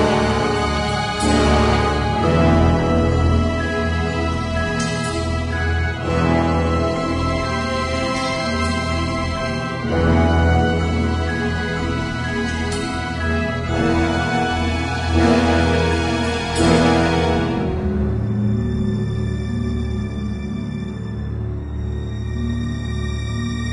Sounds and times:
Soundtrack music: 0:00.0 - 0:23.7.

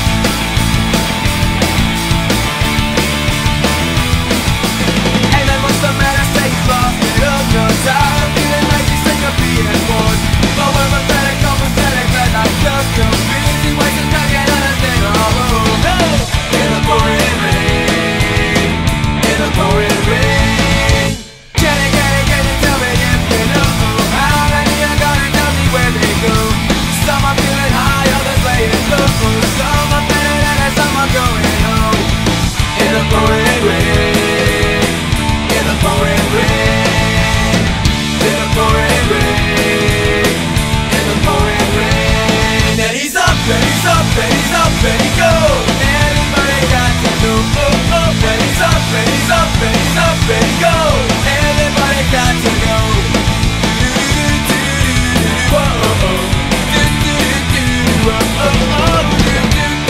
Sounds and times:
Music: 0:00.0 - 0:59.8.

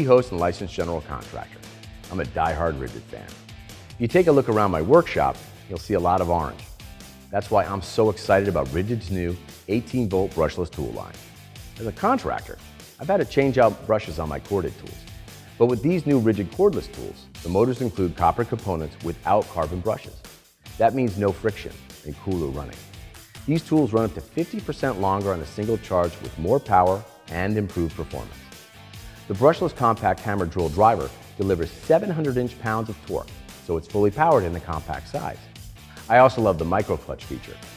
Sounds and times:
Speech: 0:00.0 - 0:03.4, 0:04.0 - 0:06.6, 0:07.3 - 0:11.2, 0:11.8 - 0:20.2, 0:20.8 - 0:22.8, 0:23.5 - 0:28.4, 0:29.3 - 0:37.6
Music: 0:00.0 - 0:37.7.

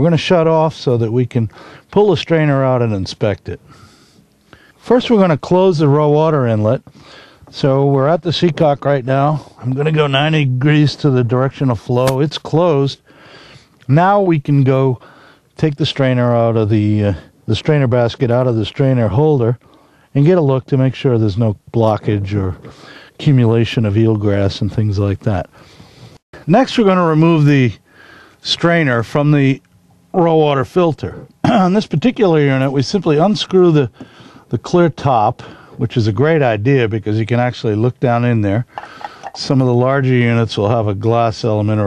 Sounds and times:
Speech: 0:00.0 - 0:03.6, 0:04.8 - 0:06.9, 0:07.5 - 0:13.0, 0:13.9 - 0:15.0, 0:15.6 - 0:22.6, 0:23.2 - 0:25.5, 0:26.5 - 0:27.8, 0:28.4 - 0:38.7, 0:39.4 - 0:41.8.

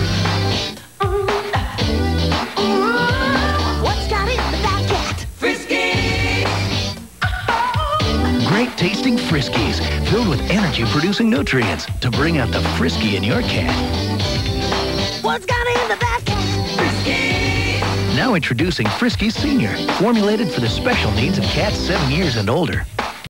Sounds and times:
Music: 0:00.0 - 0:23.3
Speech: 0:08.4 - 0:13.8, 0:18.1 - 0:22.9.

